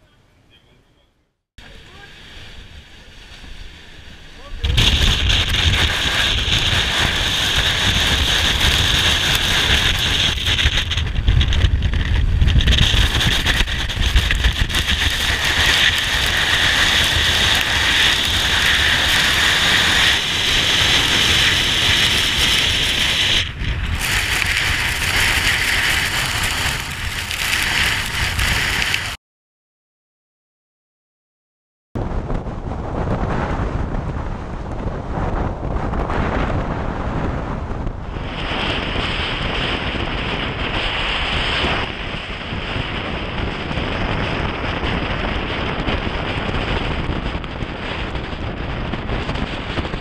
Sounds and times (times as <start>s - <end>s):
Rustling leaves: 1.6s - 29.2s.